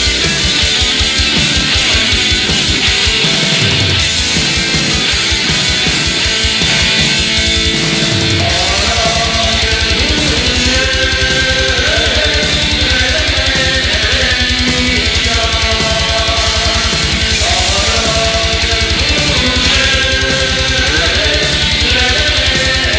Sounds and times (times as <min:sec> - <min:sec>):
Funk: 0:00.0 - 0:22.9
Pop music: 0:08.4 - 0:22.9.